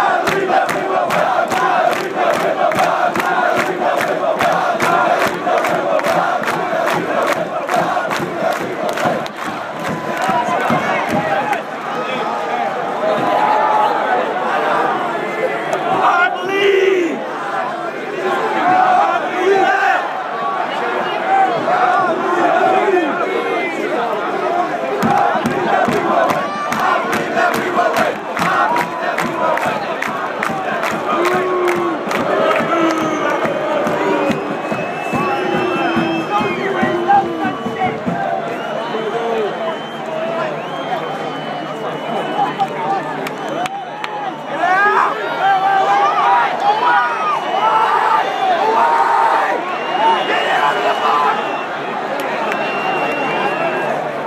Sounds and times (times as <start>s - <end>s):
Speech: 35.1s - 54.2s.